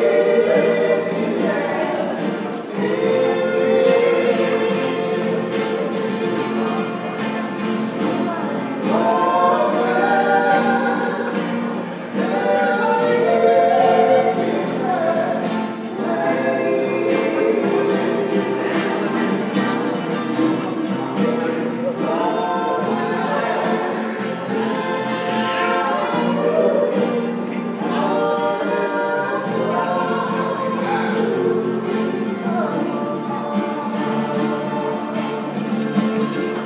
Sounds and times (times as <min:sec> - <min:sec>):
Music: 0:00.0 - 0:36.6
Male singing: 0:21.2 - 0:35.5.